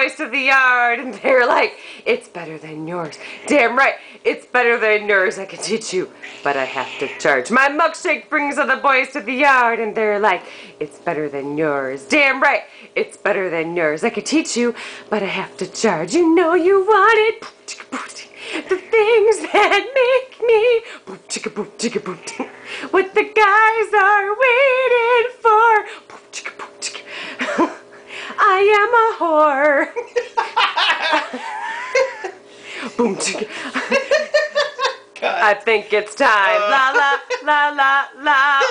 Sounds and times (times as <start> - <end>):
Speech: 35.2 - 37.4.